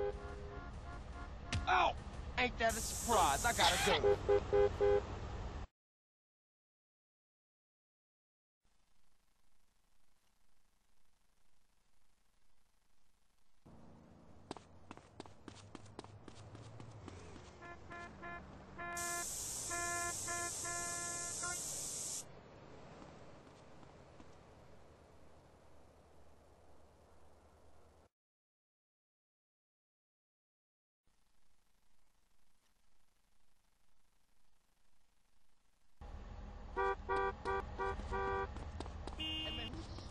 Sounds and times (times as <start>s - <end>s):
Spray: 2.7s - 3.9s, 19.0s - 22.3s.